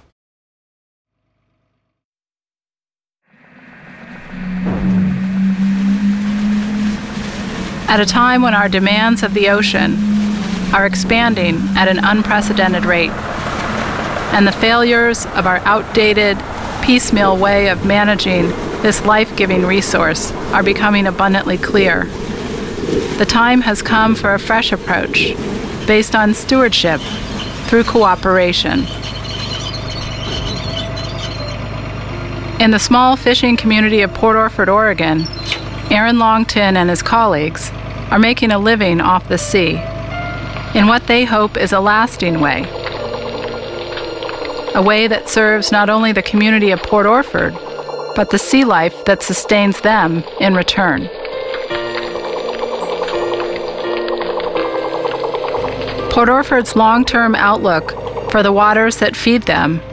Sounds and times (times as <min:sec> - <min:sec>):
Music: 0:03.4 - 0:13.2, 0:14.3 - 0:59.9
Speech: 0:07.9 - 0:10.0, 0:10.8 - 0:13.1, 0:14.3 - 0:22.1, 0:23.2 - 0:27.0, 0:27.7 - 0:28.9, 0:32.6 - 0:39.8, 0:40.8 - 0:42.7, 0:44.8 - 0:47.6, 0:48.2 - 0:51.1, 0:56.1 - 0:59.8.